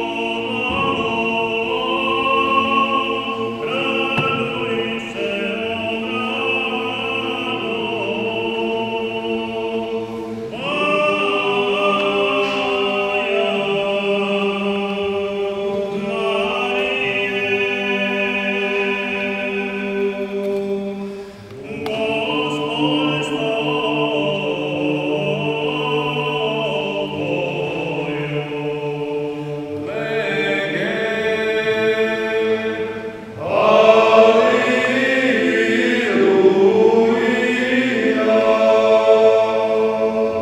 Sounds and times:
Music: 0:00.0 - 0:40.4.

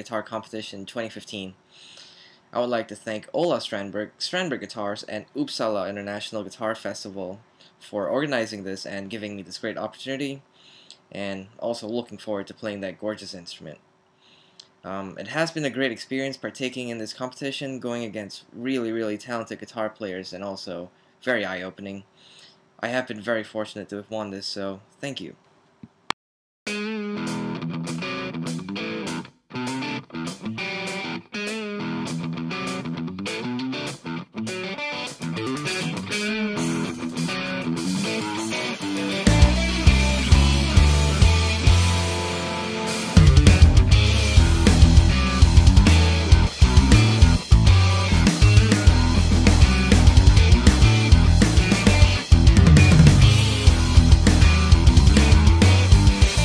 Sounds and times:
Guitar: 0:26.7 - 0:56.4.

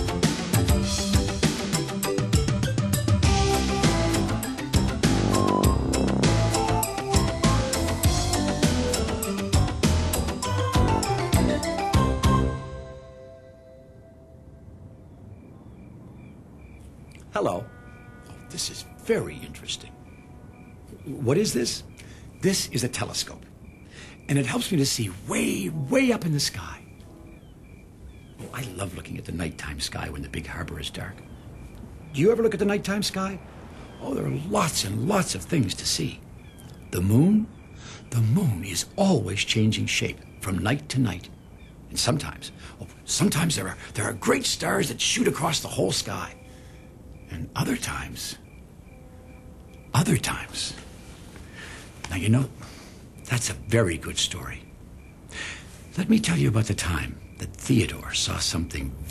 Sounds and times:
Music: 0:00.0 - 0:15.1.

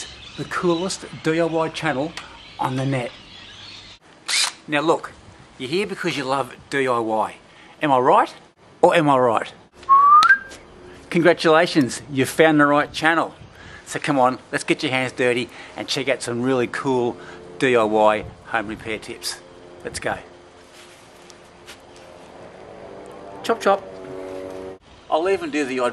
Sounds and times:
Speech: 0:00.0 - 0:03.1, 0:04.7 - 0:09.6, 0:11.1 - 0:20.3, 0:23.4 - 0:23.8, 0:25.1 - 0:25.9
Outside, rural or natural: 0:00.0 - 0:25.9.

